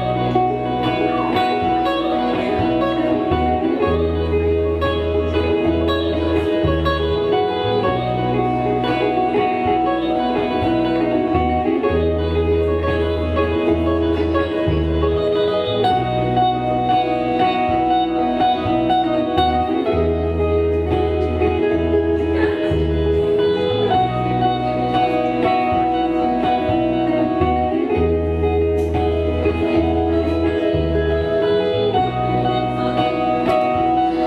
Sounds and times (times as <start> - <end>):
Guitar: 0.0 - 34.2.